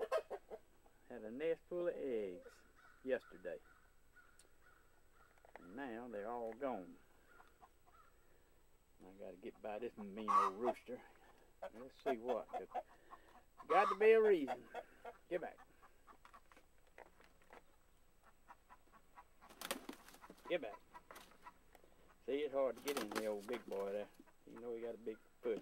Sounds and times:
Cluck: 0.0s - 1.0s, 7.3s - 8.0s, 9.5s - 16.6s, 17.5s - 22.2s, 22.9s - 25.6s.

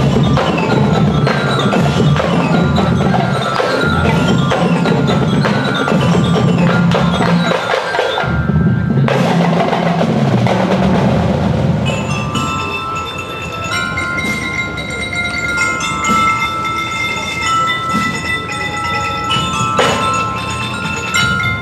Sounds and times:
Glockenspiel: 0.0s - 10.6s, 11.8s - 21.6s
Marimba, xylophone: 0.0s - 21.6s.

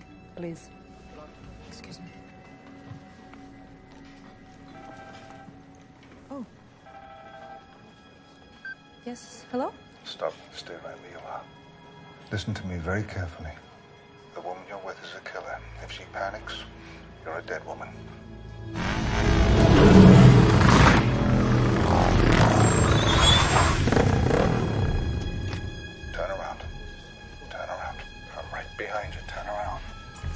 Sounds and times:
Music: 0.0s - 30.3s.

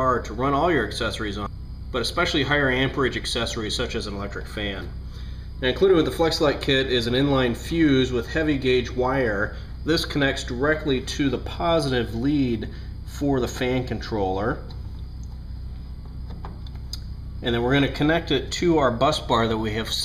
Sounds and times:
Speech: 0.0s - 4.9s, 5.6s - 14.7s, 17.4s - 20.0s.

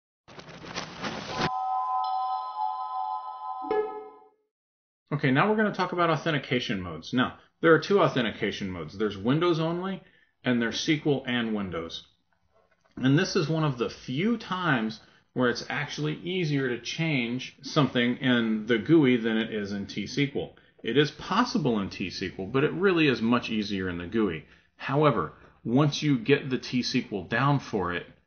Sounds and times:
Speech: 5.1s - 12.1s, 13.0s - 28.2s.

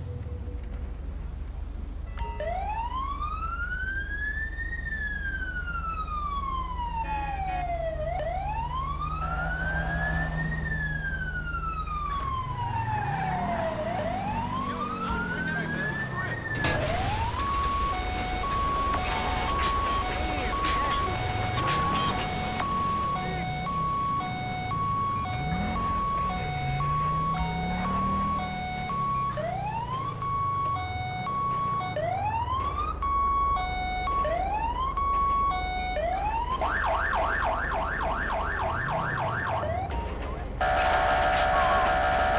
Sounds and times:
Police car (siren): 0.0s - 42.3s.

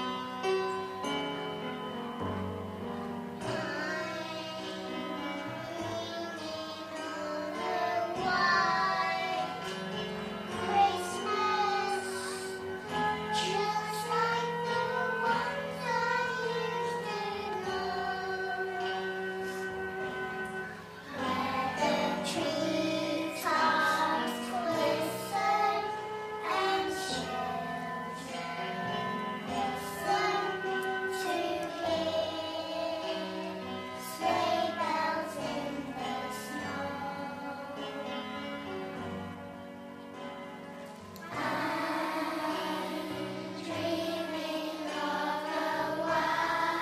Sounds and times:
Inside, large room or hall: 0.0s - 46.8s
Choir: 3.4s - 38.2s, 41.2s - 46.8s.

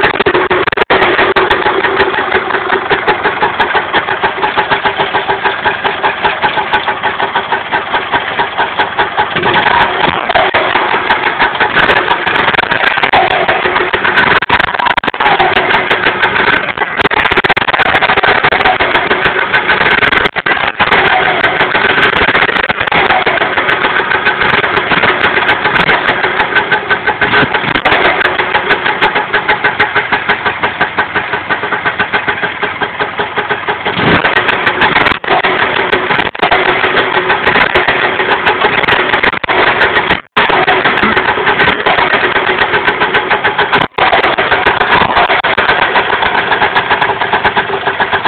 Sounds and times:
Idling: 0.0s - 48.2s
Medium engine (mid frequency): 0.0s - 48.2s.

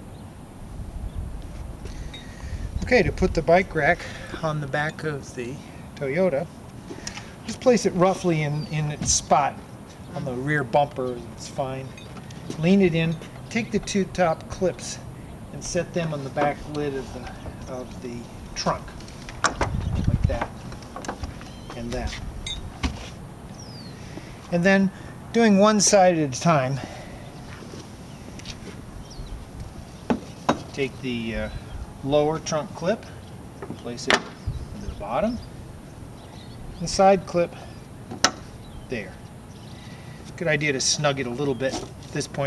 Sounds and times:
Speech: 2.8s - 6.5s, 7.5s - 11.9s, 12.6s - 15.0s, 15.6s - 19.0s, 20.1s - 20.5s, 21.7s - 22.2s, 24.5s - 26.9s, 30.8s - 33.2s, 33.8s - 34.2s, 34.8s - 35.4s, 36.8s - 37.6s, 38.9s - 39.2s, 40.4s - 42.4s.

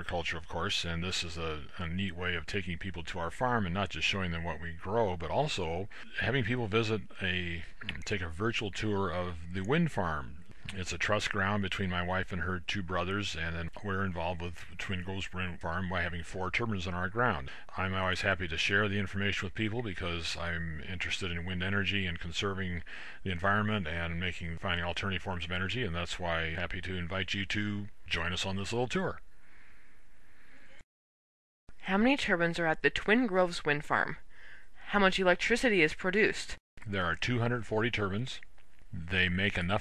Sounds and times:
Speech: 0.0s - 29.2s, 31.8s - 34.2s, 34.8s - 39.8s.

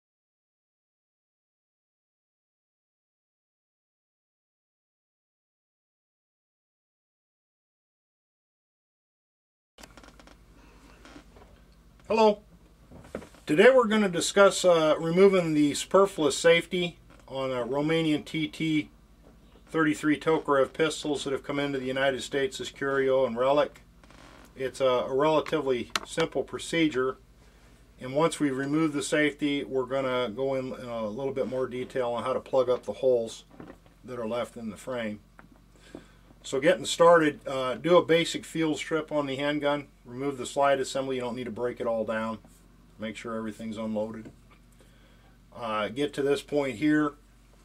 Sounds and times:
Speech: 12.1s - 12.4s, 13.5s - 18.9s, 19.7s - 23.8s, 24.6s - 27.2s, 28.0s - 33.5s, 34.1s - 35.2s, 36.4s - 44.4s, 45.6s - 47.2s.

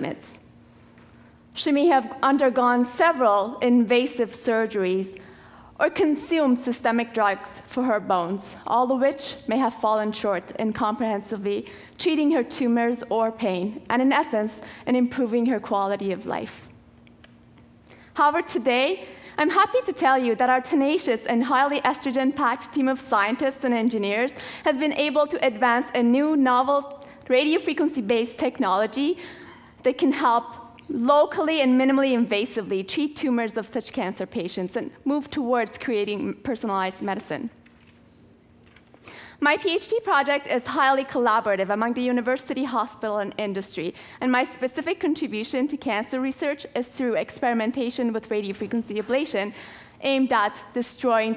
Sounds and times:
Speech: 1.6s - 5.2s, 5.8s - 16.7s, 18.2s - 29.2s, 29.8s - 37.6s, 39.4s - 51.3s.

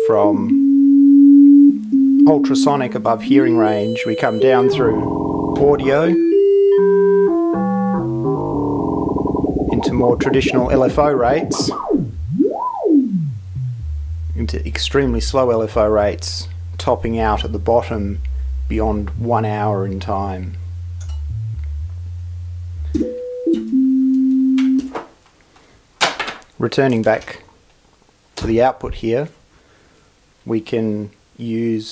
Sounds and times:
Speech: 0.0s - 0.5s, 2.2s - 6.2s, 9.7s - 11.8s, 14.4s - 20.6s, 26.6s - 27.5s, 28.4s - 29.4s, 30.4s - 31.9s
Synthesizer: 3.4s - 24.9s.

